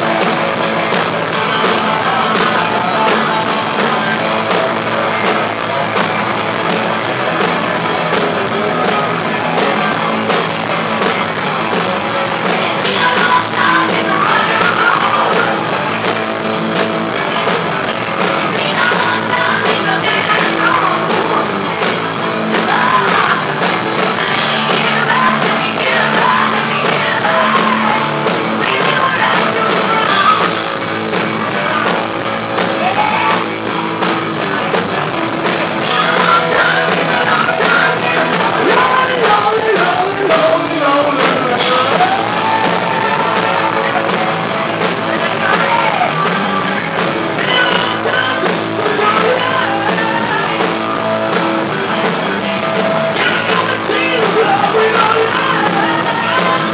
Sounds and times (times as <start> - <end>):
Rock and roll: 0.0 - 56.7.